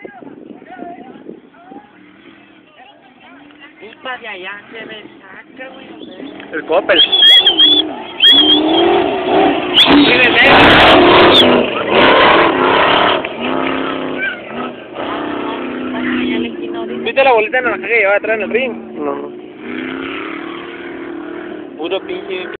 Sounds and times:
Car: 0.0 - 22.5.

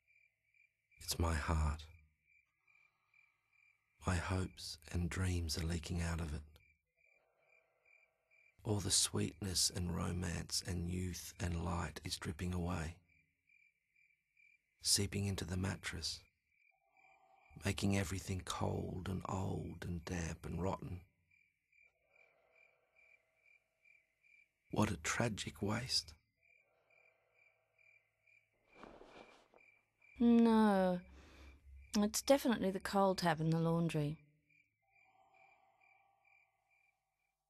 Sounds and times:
Speech: 1.0 - 1.9, 4.0 - 6.5, 8.7 - 13.0, 14.8 - 16.2, 17.6 - 21.0, 24.8 - 26.1, 30.2 - 31.0, 32.0 - 34.2.

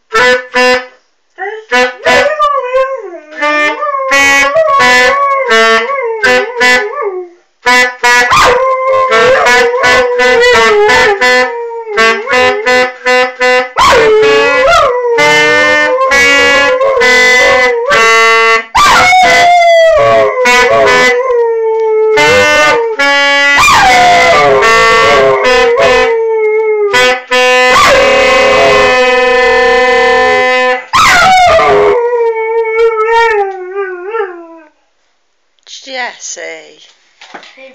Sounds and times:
Howl: 31.0 - 34.7
Speech: 35.7 - 36.9.

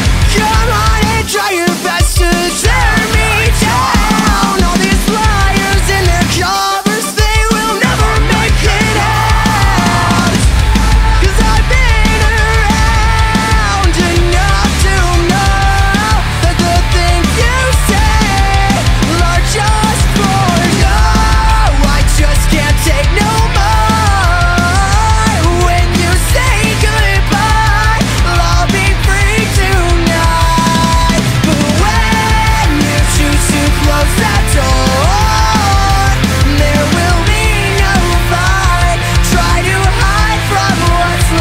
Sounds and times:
Exciting music: 0.0 - 41.4.

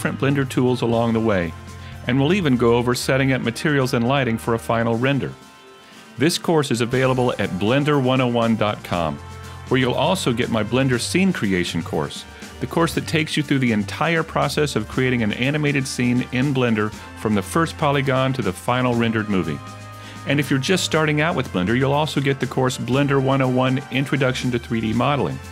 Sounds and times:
Speech: 0.0 - 5.4, 6.2 - 19.6, 20.3 - 25.5
Music: 0.0 - 25.5.

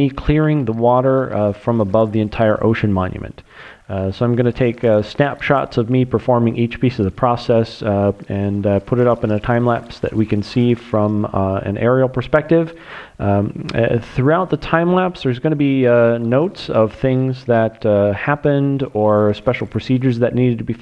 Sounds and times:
Speech: 0.0 - 20.8.

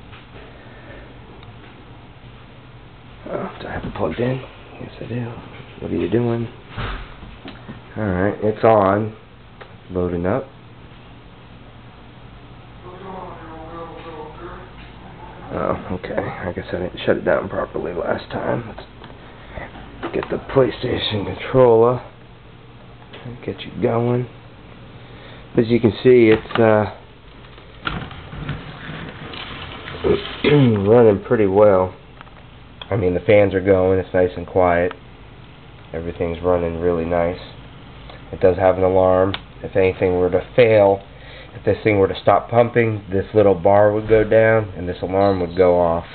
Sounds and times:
Speech: 3.2 - 6.6, 7.9 - 9.2, 9.9 - 10.5, 12.8 - 18.9, 20.1 - 22.1, 23.2 - 24.3, 25.6 - 27.0, 30.0 - 32.0, 32.9 - 35.0, 35.9 - 37.6, 38.3 - 41.0, 41.6 - 46.1.

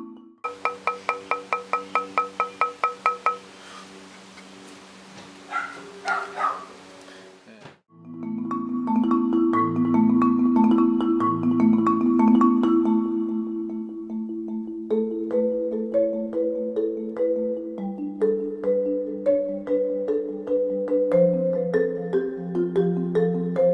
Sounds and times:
Marimba, xylophone: 0.0 - 3.8, 7.9 - 23.7.

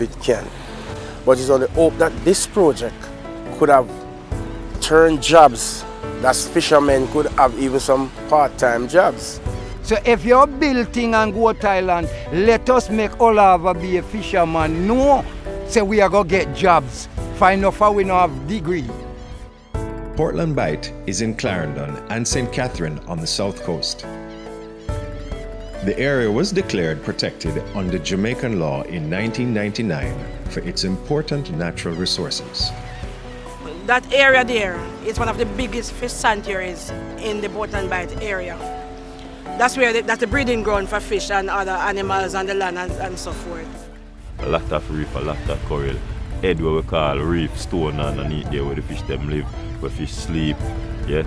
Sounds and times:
Music: 0.0 - 51.2.

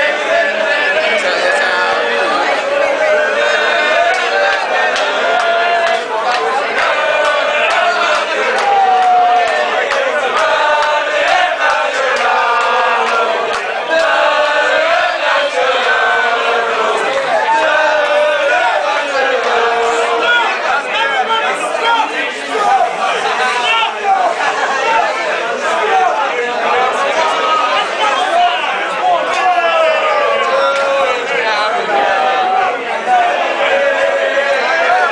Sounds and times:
Speech: 0.0 - 35.1.

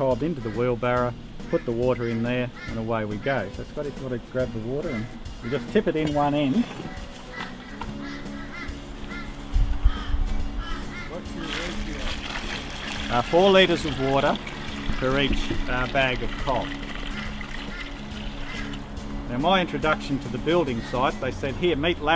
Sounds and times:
Music: 0.0 - 22.1.

